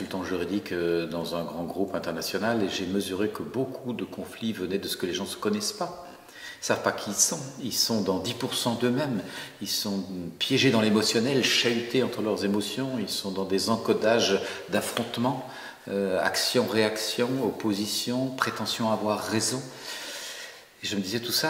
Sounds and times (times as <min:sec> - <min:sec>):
Speech: 0:00.0 - 0:19.8, 0:20.8 - 0:21.4.